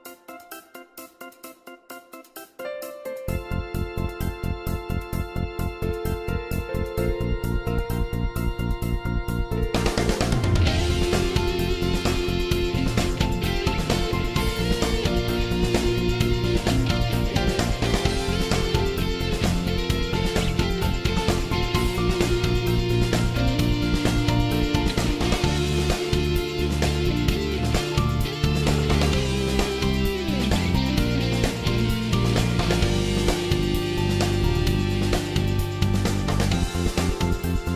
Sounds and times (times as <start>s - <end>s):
Music: 0.0s - 37.7s.